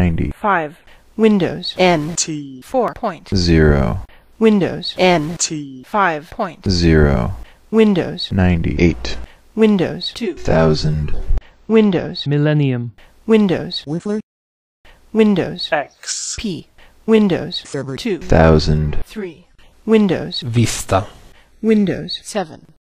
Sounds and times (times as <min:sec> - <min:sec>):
Speech: 0:00.0 - 0:14.2, 0:15.2 - 0:22.8.